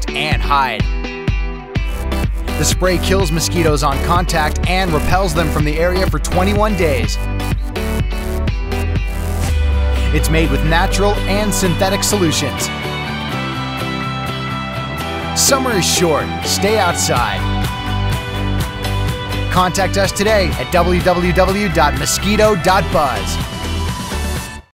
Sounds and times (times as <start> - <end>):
Speech: 0.0 - 0.9, 2.6 - 7.2, 10.1 - 12.7, 15.4 - 17.4, 19.5 - 23.4
Music: 0.0 - 24.7.